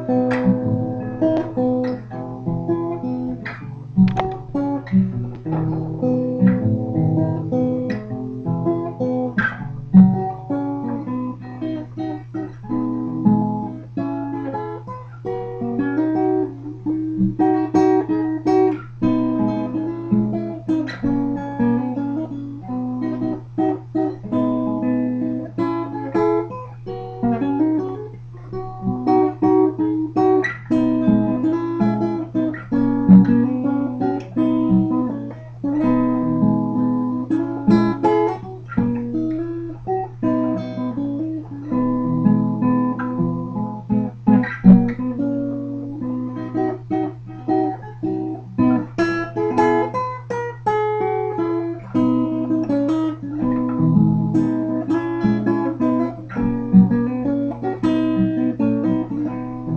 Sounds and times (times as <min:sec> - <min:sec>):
Music: 0:00.0 - 0:59.7.